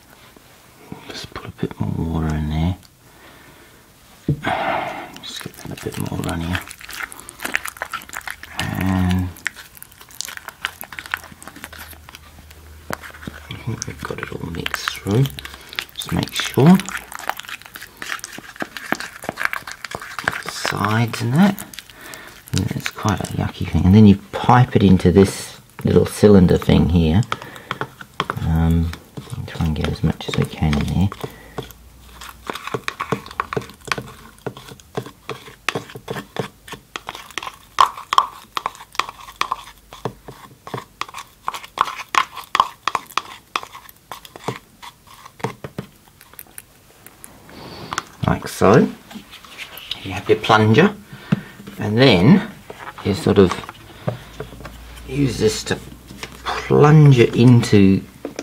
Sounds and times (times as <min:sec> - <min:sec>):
Inside, small room: 0:00.0 - 0:58.4
Speech: 0:01.0 - 0:02.8, 0:05.2 - 0:06.7, 0:08.5 - 0:09.4, 0:13.5 - 0:15.4, 0:16.0 - 0:16.9, 0:20.5 - 0:21.7, 0:22.5 - 0:27.3, 0:28.3 - 0:31.2, 0:48.2 - 0:49.0, 0:50.0 - 0:51.0, 0:51.8 - 0:53.7, 0:55.1 - 0:55.8, 0:56.4 - 0:58.1.